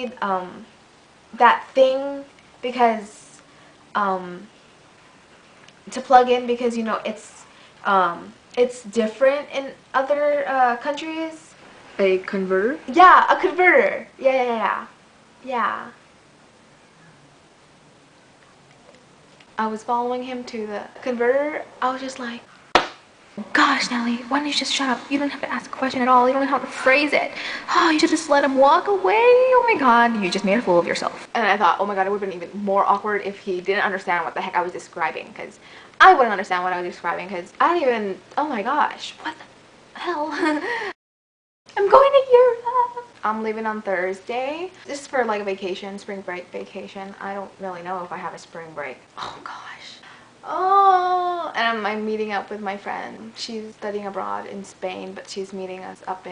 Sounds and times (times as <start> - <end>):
Speech: 0.0 - 0.7, 1.4 - 3.4, 4.0 - 4.5, 5.9 - 16.0, 19.6 - 22.5, 23.4 - 40.6, 41.7 - 56.3
Inside, small room: 0.0 - 41.0, 41.7 - 56.3.